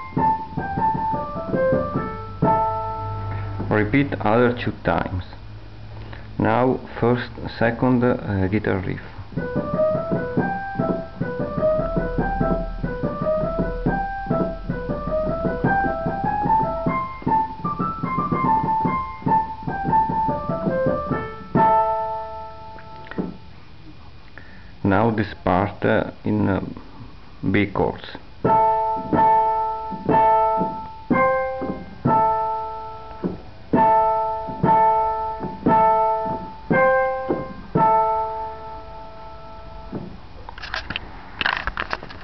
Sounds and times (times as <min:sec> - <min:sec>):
Music: 0:00.0 - 0:03.9, 0:09.4 - 0:23.5, 0:28.4 - 0:40.1.